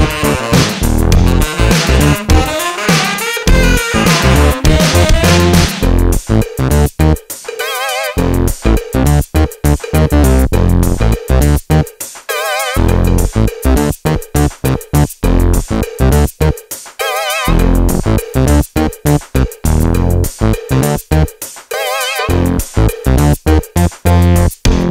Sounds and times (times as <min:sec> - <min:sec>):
Drum machine: 0:00.0 - 0:24.9.